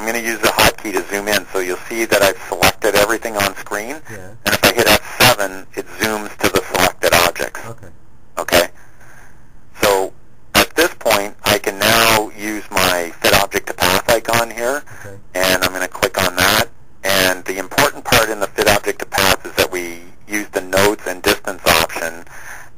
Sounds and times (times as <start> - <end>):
Speech: 0.0 - 8.7, 9.8 - 22.3.